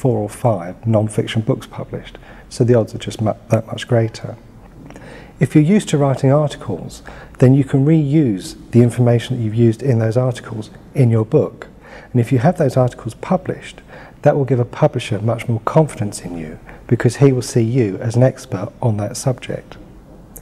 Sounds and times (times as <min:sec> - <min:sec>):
Speech: 0:00.0 - 0:04.4, 0:05.4 - 0:19.8.